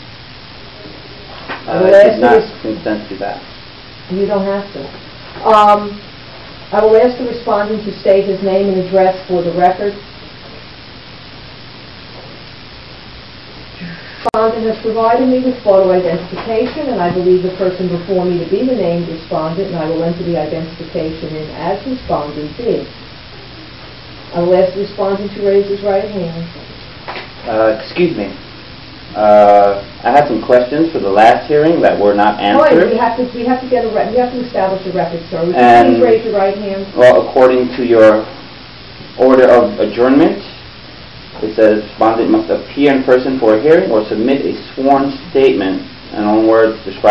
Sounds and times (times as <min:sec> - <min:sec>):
Speech: 0:01.7 - 0:03.4, 0:04.1 - 0:06.0, 0:29.2 - 0:38.3.